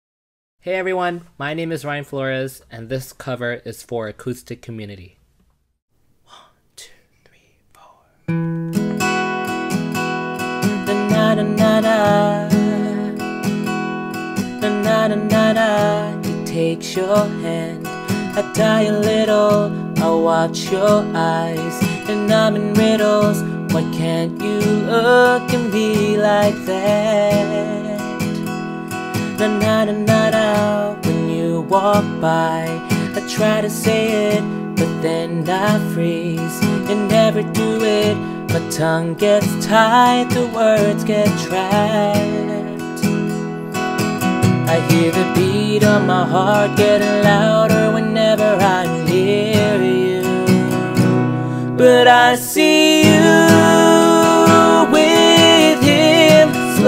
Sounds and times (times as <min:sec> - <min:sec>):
Whispering: 0:06.3 - 0:08.2.